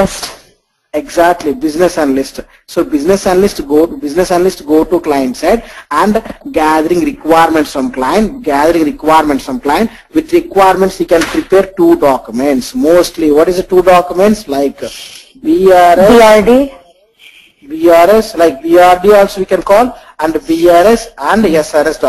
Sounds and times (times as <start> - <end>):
Speech: 0.0 - 0.4, 1.0 - 22.0.